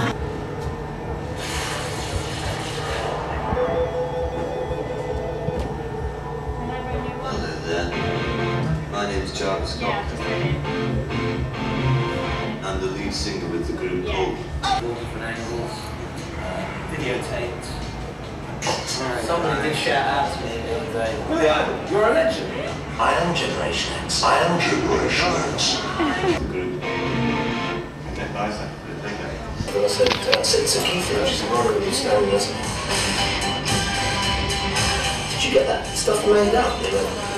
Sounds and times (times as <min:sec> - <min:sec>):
Music: 0:00.0 - 0:12.8, 0:26.1 - 0:28.0, 0:29.7 - 0:37.3
Speech: 0:08.9 - 0:10.2, 0:12.6 - 0:26.8, 0:28.1 - 0:32.6, 0:35.4 - 0:37.3.